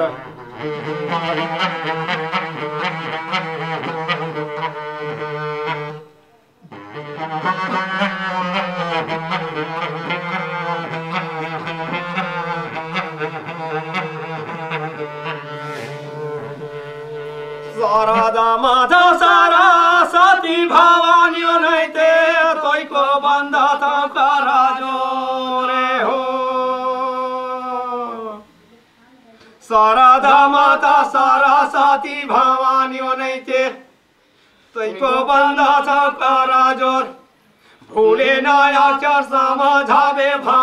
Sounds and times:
Music: 0.0s - 24.2s
Male singing: 16.6s - 28.5s, 29.6s - 33.9s, 34.8s - 37.2s, 37.8s - 40.6s.

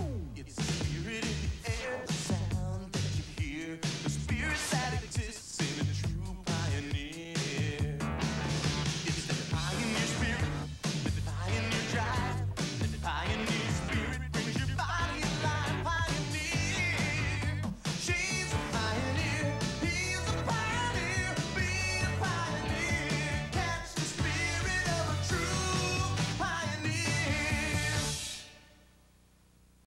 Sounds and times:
Music: 0.0s - 28.8s.

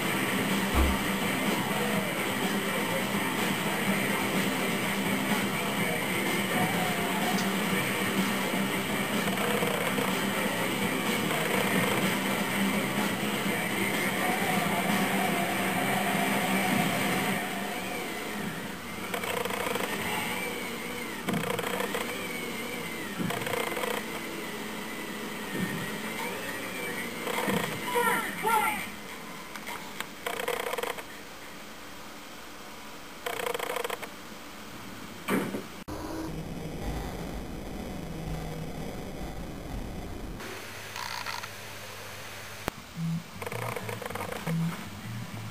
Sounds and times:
Speech: 5.6s - 8.2s, 27.8s - 29.0s.

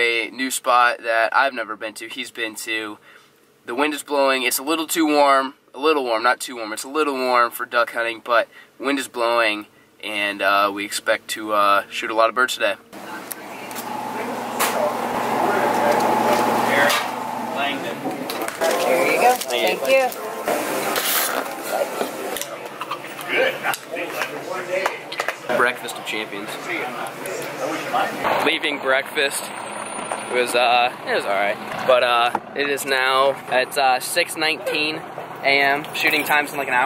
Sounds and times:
Speech: 0.0s - 3.0s, 3.7s - 17.0s, 21.7s - 29.5s, 30.3s - 36.8s.

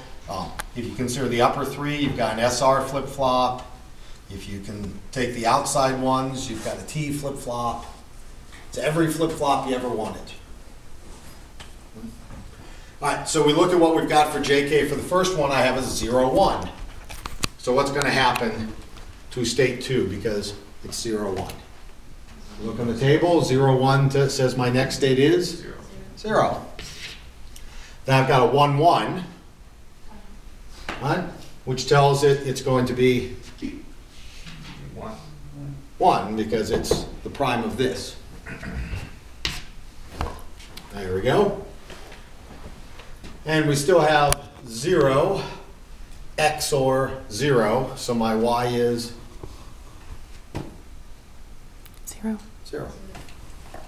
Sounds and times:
Speech: 0.3s - 3.7s, 43.4s - 45.6s, 46.4s - 49.2s.

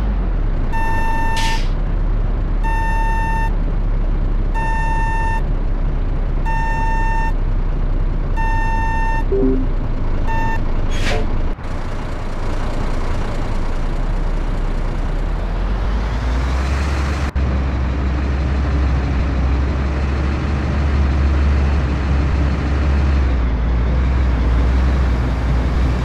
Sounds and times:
Reversing beeps: 0.8s - 1.6s, 2.7s - 3.5s, 4.6s - 5.4s, 6.5s - 7.4s, 8.4s - 9.7s, 10.3s - 10.6s.

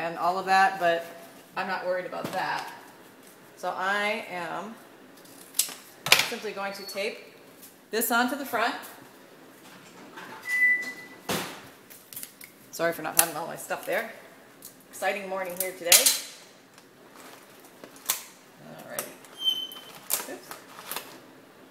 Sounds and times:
Speech: 6.3s - 7.3s, 7.9s - 8.9s, 15.0s - 16.1s, 18.6s - 19.2s.

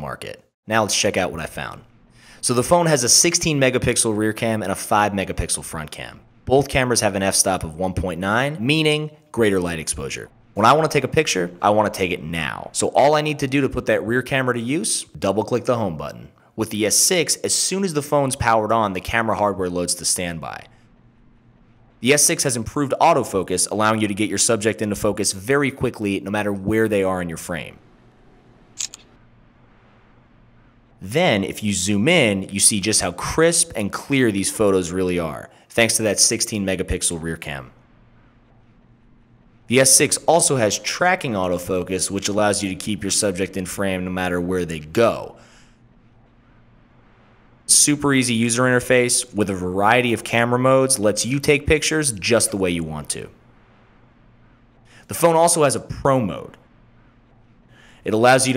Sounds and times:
Speech: 0.0s - 20.8s, 22.0s - 27.8s, 31.0s - 37.8s, 39.7s - 45.5s, 47.7s - 53.4s, 55.0s - 56.6s, 58.0s - 58.5s.

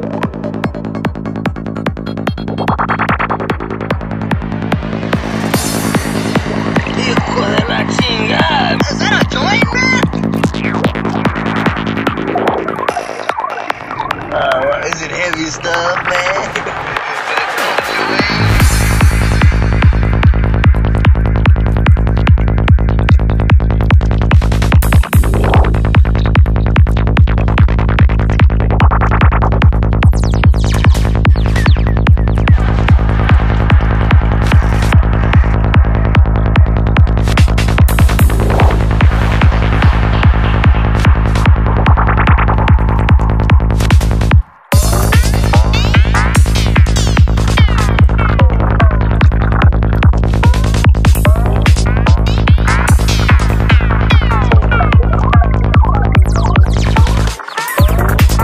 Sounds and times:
Music: 0.0s - 58.4s.

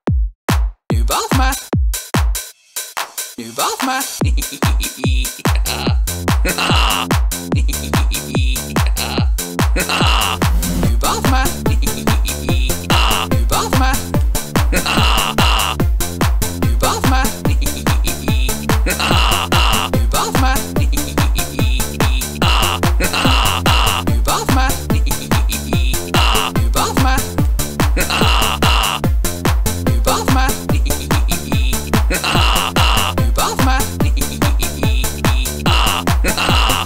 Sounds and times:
Techno: 3.6s - 36.8s.

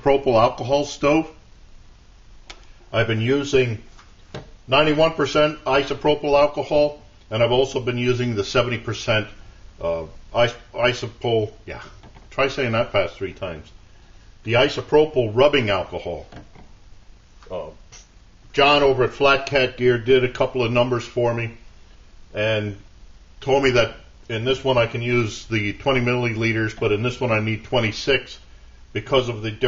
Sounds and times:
Speech: 0.0s - 1.4s, 2.9s - 3.9s, 4.7s - 13.8s, 14.4s - 16.4s, 17.4s - 21.6s, 22.3s - 22.8s, 23.4s - 28.4s, 29.0s - 29.6s.

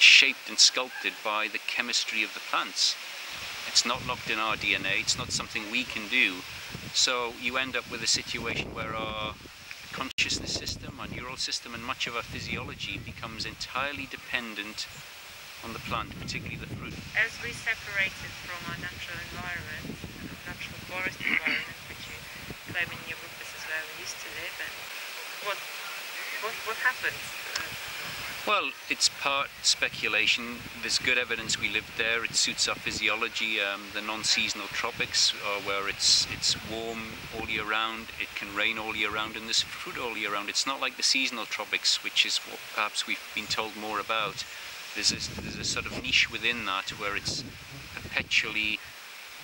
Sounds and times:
Speech: 0.0s - 3.0s, 3.6s - 14.9s, 15.6s - 27.7s, 28.4s - 48.8s
Outside, rural or natural: 0.0s - 49.4s
Outside, urban or manmade: 0.0s - 49.4s.

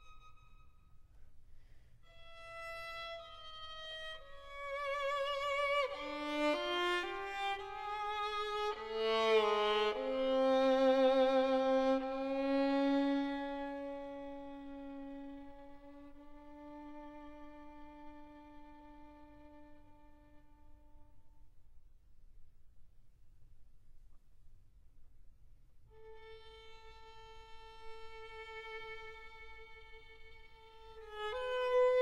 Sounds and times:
Violin, fiddle: 0.0s - 1.1s, 2.1s - 21.1s, 25.9s - 32.0s.

